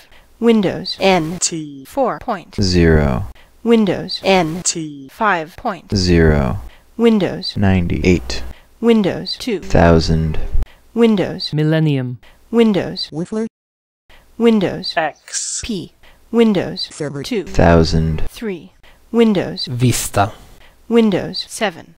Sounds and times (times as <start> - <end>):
Speech synthesizer: 0.4 - 10.4, 11.0 - 13.5, 14.4 - 21.9.